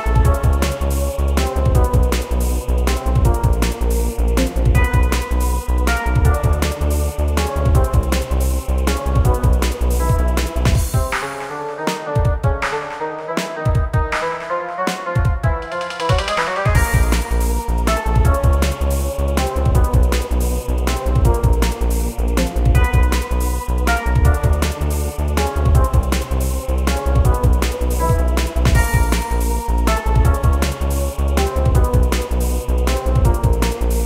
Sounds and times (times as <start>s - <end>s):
Music: 0.0s - 34.0s.